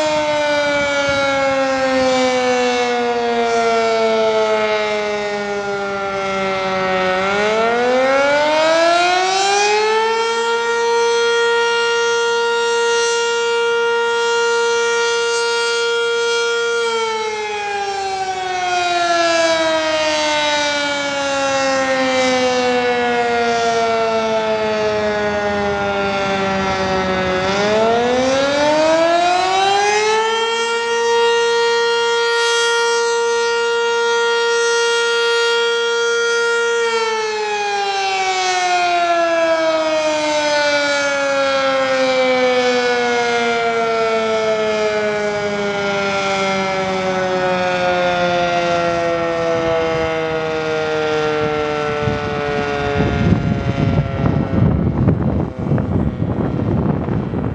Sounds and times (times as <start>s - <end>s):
Civil defense siren: 0.0s - 57.5s.